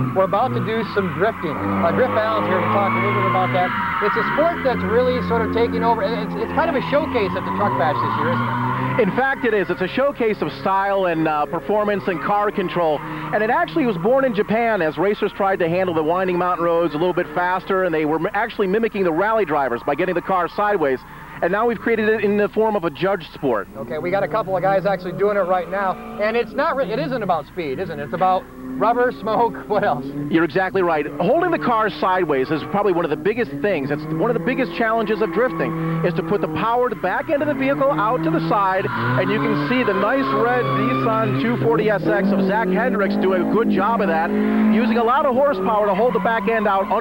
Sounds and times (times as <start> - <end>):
Race car, auto racing: 0.0 - 47.0
Skidding: 0.0 - 47.0
Speech: 0.0 - 47.0.